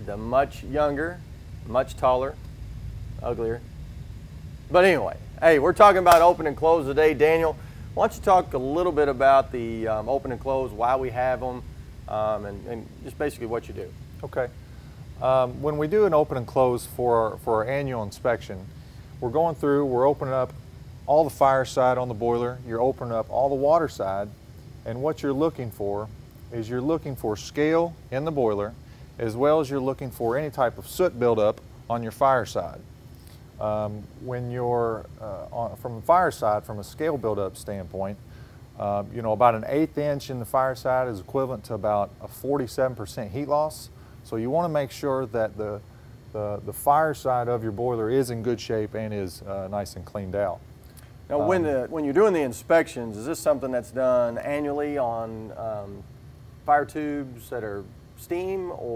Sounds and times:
Speech: 0:00.0 - 0:02.4, 0:03.2 - 0:03.6, 0:04.7 - 0:14.6, 0:15.2 - 0:32.8, 0:33.6 - 0:38.2, 0:38.8 - 0:50.6, 0:51.3 - 0:56.0, 0:56.6 - 0:58.9.

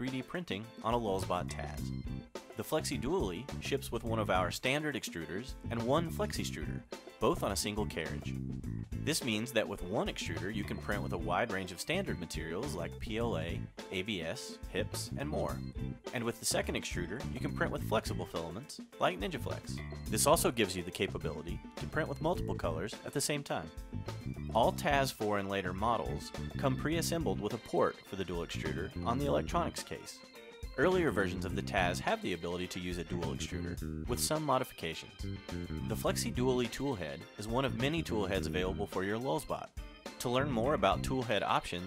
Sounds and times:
Speech: 0:00.0 - 0:02.0, 0:02.6 - 0:08.4, 0:09.1 - 0:23.8, 0:24.5 - 0:30.2, 0:30.8 - 0:35.2, 0:35.9 - 0:41.8
Music: 0:00.0 - 0:41.8.

